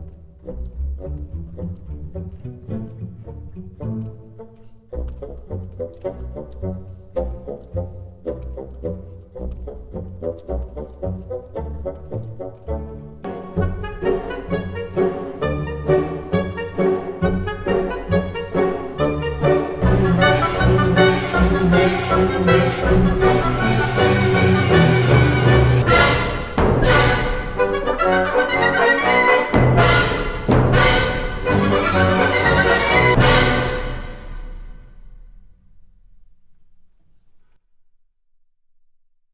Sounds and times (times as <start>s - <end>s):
Brass instrument: 0.6s - 35.4s.